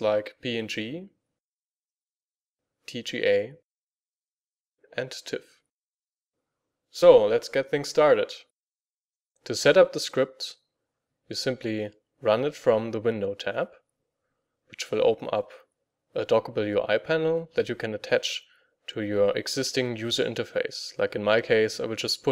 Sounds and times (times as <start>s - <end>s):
Speech: 0.0s - 1.2s, 2.9s - 3.6s, 4.9s - 5.6s, 6.9s - 8.5s, 9.4s - 10.6s, 11.3s - 13.8s, 14.7s - 22.3s.